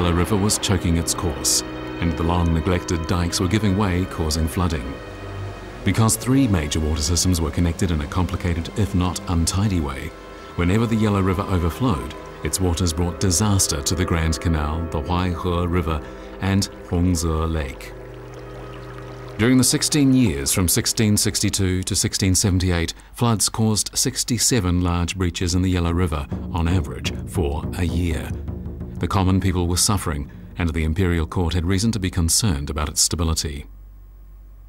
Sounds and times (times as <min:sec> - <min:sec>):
Speech: 0:00.0 - 0:05.0, 0:05.8 - 0:17.9, 0:19.4 - 0:28.4, 0:29.0 - 0:33.7
Music: 0:00.0 - 0:22.9, 0:24.5 - 0:32.7.